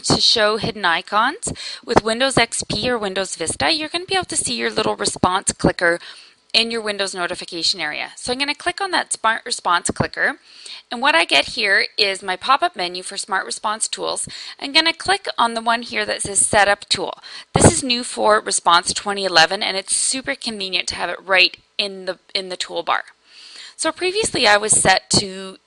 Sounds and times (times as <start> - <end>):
Speech: 0.0 - 6.0, 6.6 - 23.2, 23.8 - 25.6.